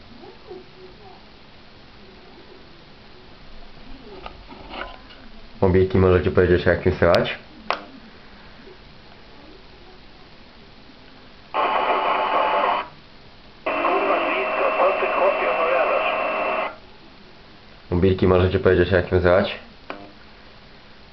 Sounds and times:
Radio: 11.5s - 13.0s, 13.6s - 16.8s
Speech: 13.7s - 16.3s, 17.9s - 19.7s.

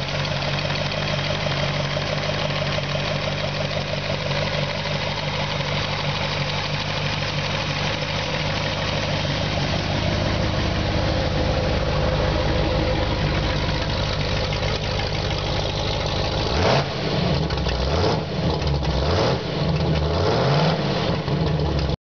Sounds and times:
Idling: 0.0s - 18.9s
Vehicle: 0.0s - 22.0s
Accelerating, revving, vroom: 16.4s - 21.6s.

